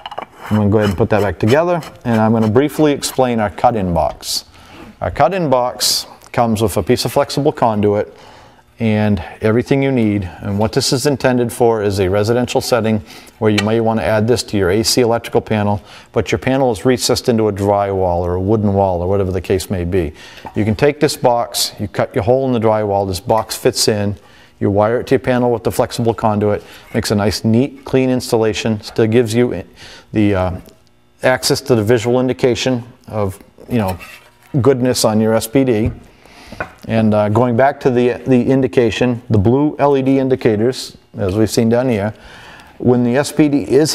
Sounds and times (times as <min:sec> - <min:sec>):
Speech: 0:00.5 - 0:08.2, 0:08.8 - 0:36.0, 0:36.9 - 0:42.2, 0:42.8 - 0:43.9.